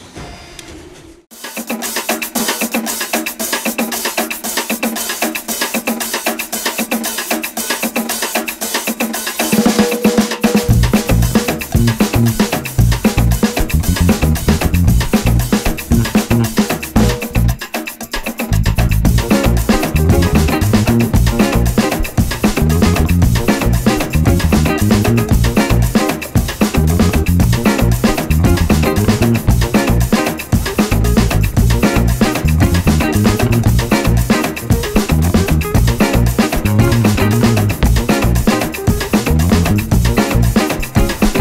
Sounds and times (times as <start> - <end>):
Music: 1.4 - 41.4.